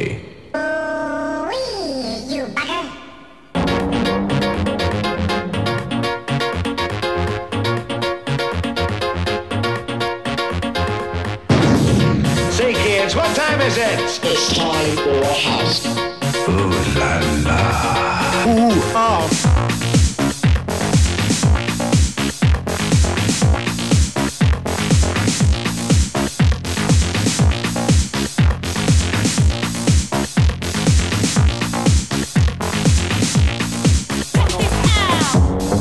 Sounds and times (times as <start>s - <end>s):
Music: 0.0s - 35.8s.